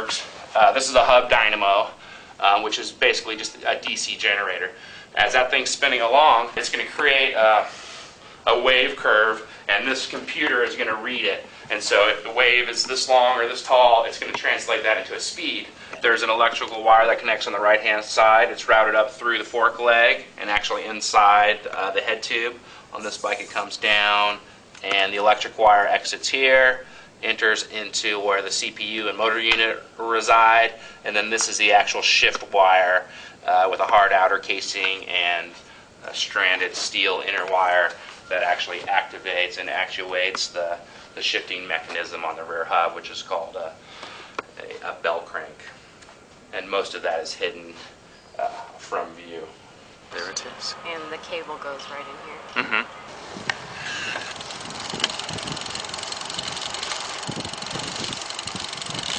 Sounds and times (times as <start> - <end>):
Speech: 0.0 - 7.7, 8.5 - 43.8, 44.6 - 45.8, 46.6 - 52.7.